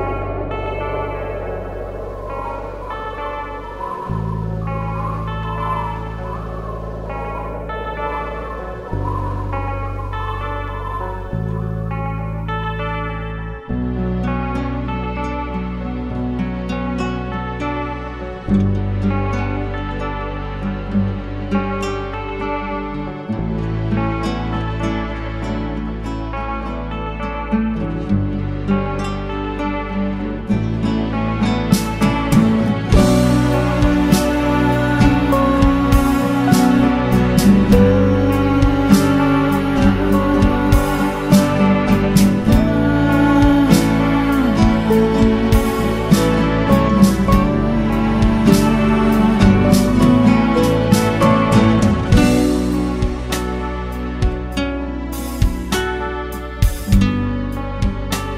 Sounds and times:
Music: 0:00.0 - 0:58.3.

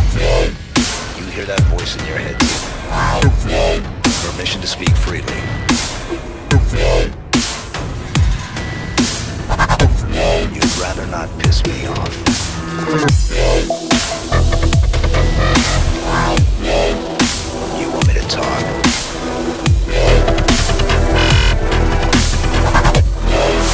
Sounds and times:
Speech: 0:01.2 - 0:02.6, 0:03.2 - 0:05.6, 0:10.1 - 0:12.2, 0:17.8 - 0:18.8
Electronic dance music: 0:09.4 - 0:23.7.

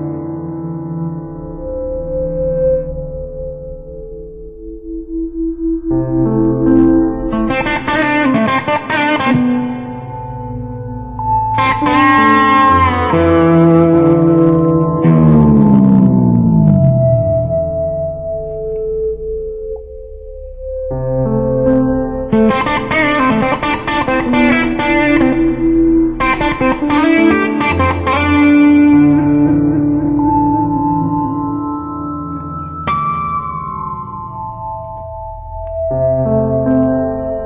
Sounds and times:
Strum: 0:01.0 - 0:20.2, 0:21.2 - 0:31.6.

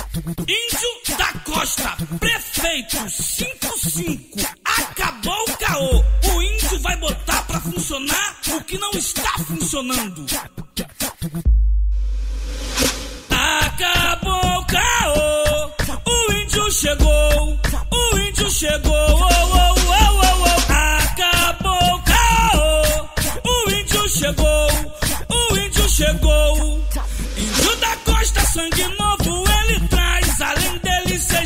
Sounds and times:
Music: 0:12.2 - 0:31.4.

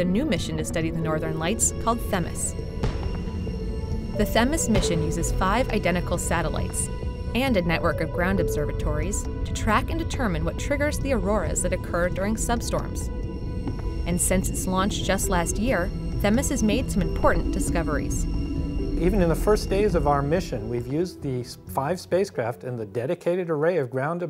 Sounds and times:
Speech: 0:00.0 - 0:02.5, 0:19.0 - 0:24.2
Music: 0:00.0 - 0:24.2.

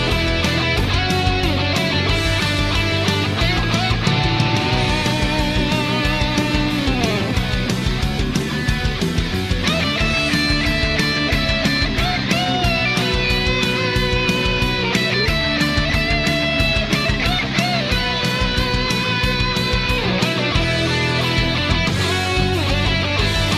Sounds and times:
Music: 0:00.0 - 0:23.5.

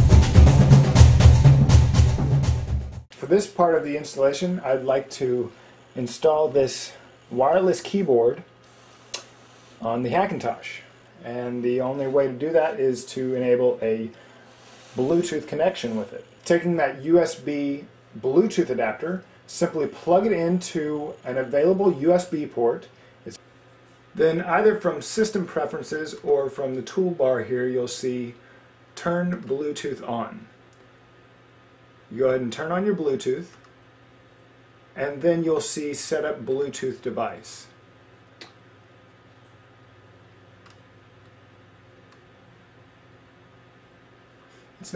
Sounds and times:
Inside, small room: 0:00.0 - 0:44.9
Speech: 0:03.2 - 0:08.5, 0:09.8 - 0:14.2, 0:15.0 - 0:23.4, 0:24.2 - 0:28.4, 0:29.0 - 0:30.5, 0:32.1 - 0:33.6, 0:35.0 - 0:37.8.

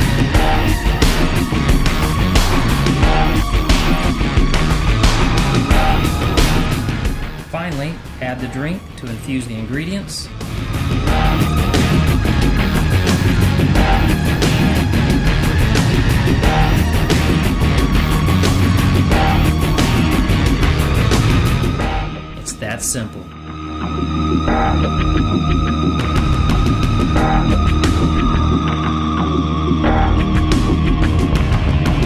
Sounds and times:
Music: 0:00.0 - 0:32.0
Speech: 0:07.5 - 0:10.3, 0:22.4 - 0:23.3.

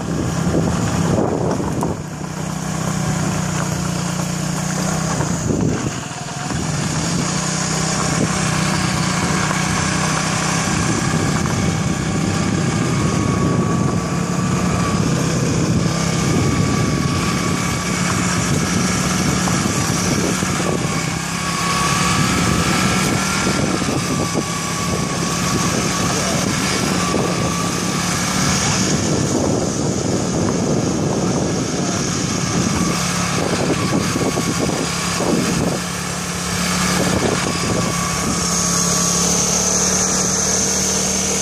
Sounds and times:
Motorcycle: 0:00.0 - 0:41.4
Outside, rural or natural: 0:00.0 - 0:41.4.

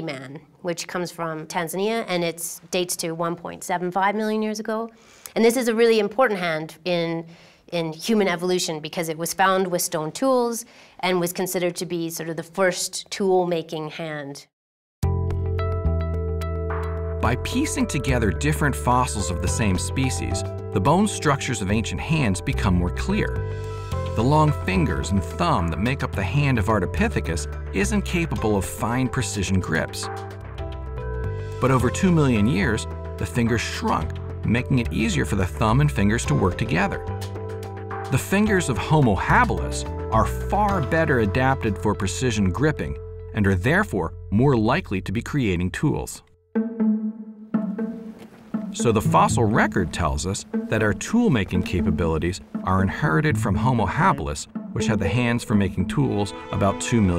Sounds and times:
Speech: 0:00.0 - 0:14.5, 0:17.2 - 0:23.4, 0:24.2 - 0:30.1, 0:31.6 - 0:37.1, 0:38.1 - 0:46.3, 0:48.8 - 0:57.1.

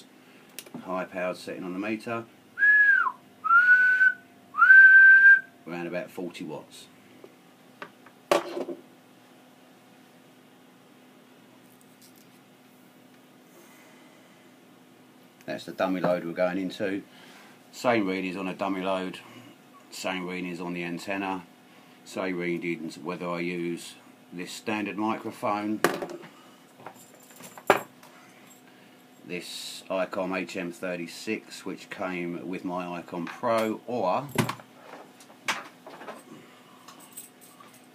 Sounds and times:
Speech: 0:00.8 - 0:02.3, 0:05.6 - 0:07.0, 0:15.4 - 0:17.1, 0:17.7 - 0:19.3, 0:19.9 - 0:21.5, 0:22.1 - 0:25.8, 0:29.3 - 0:34.4.

